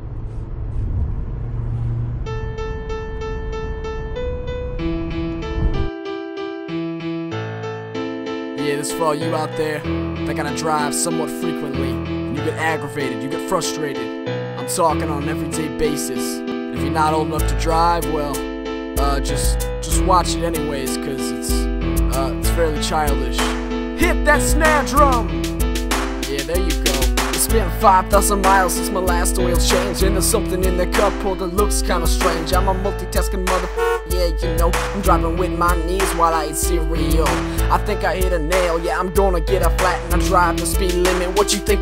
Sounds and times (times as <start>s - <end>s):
Funny music: 2.5s - 41.8s.